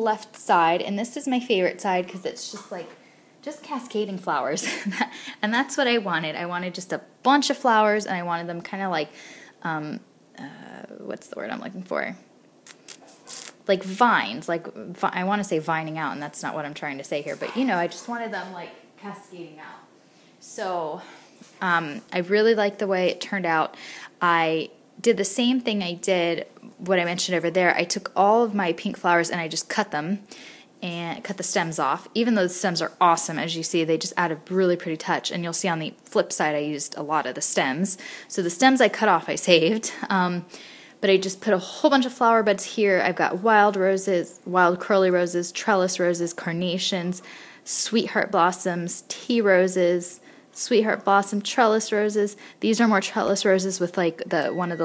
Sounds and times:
Speech: 0.0 - 4.7, 5.4 - 12.2, 13.6 - 30.2, 30.8 - 54.8.

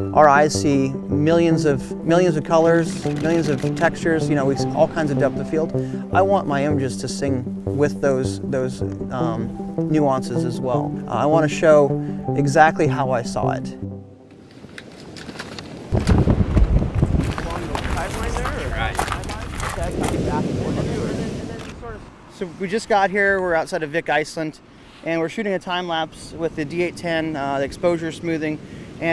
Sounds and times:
Music: 0.0 - 14.3
Speech: 0.2 - 13.8, 17.4 - 29.1.

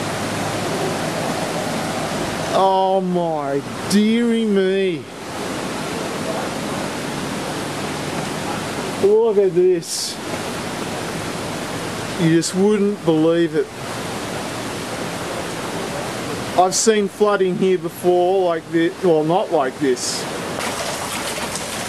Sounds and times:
Rain: 0.0 - 21.8.

